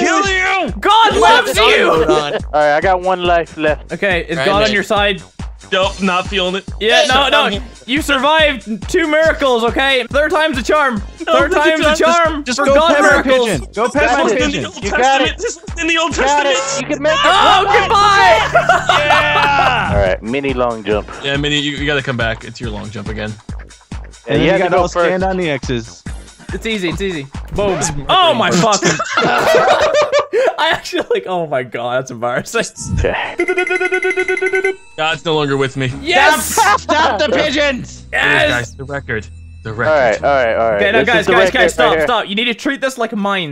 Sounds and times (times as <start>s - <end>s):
Speech: 0.0s - 5.2s, 5.8s - 18.4s, 19.4s - 23.4s, 24.3s - 29.0s, 30.5s - 33.1s, 35.0s - 43.5s.